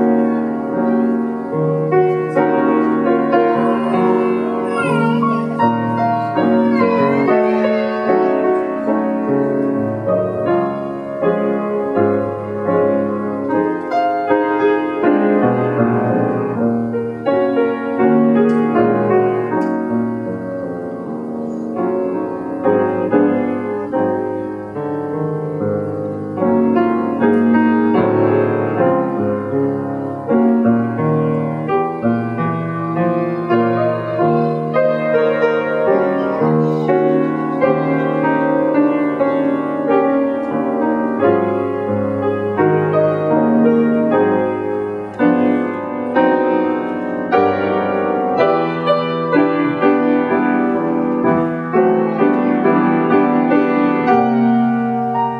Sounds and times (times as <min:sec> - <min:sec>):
Piano: 0:00.0 - 0:55.3.